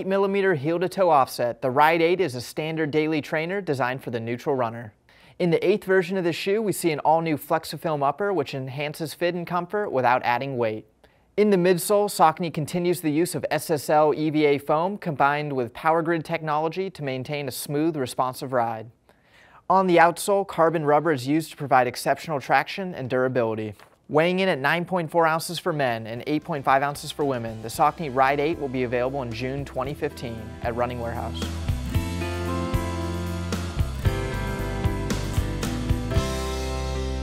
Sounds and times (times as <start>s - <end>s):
Speech: 0.0s - 19.0s, 19.7s - 31.5s
Music: 26.3s - 37.2s.